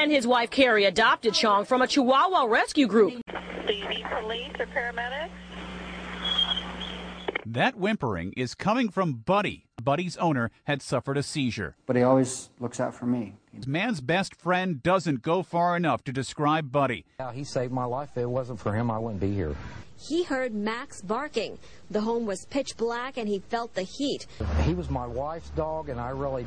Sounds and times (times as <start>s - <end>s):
Speech: 0.1s - 5.3s, 7.4s - 26.4s.